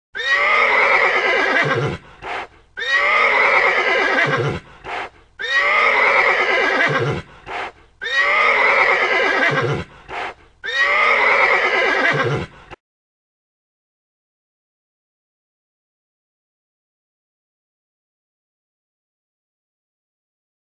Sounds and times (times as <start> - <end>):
Neigh, whinny: 0.2 - 2.0, 2.8 - 4.6, 5.4 - 7.3, 8.0 - 9.9, 10.6 - 12.8.